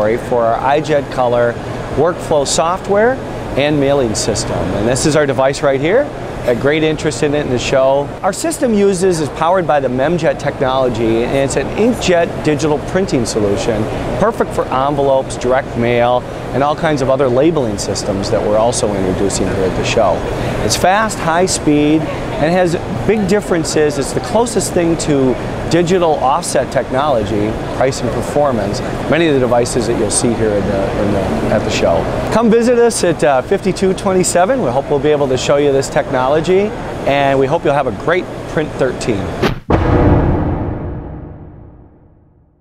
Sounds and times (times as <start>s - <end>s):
Speech: 0.0s - 39.4s.